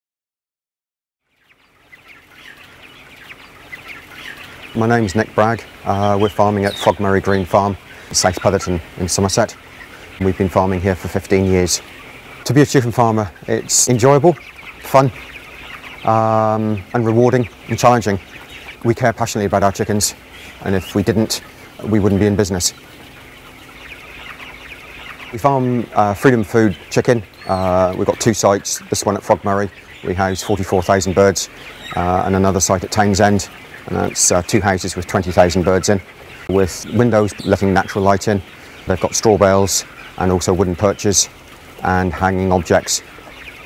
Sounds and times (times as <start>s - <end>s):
Bird: 1.2s - 43.6s
Chicken, rooster: 1.6s - 43.6s.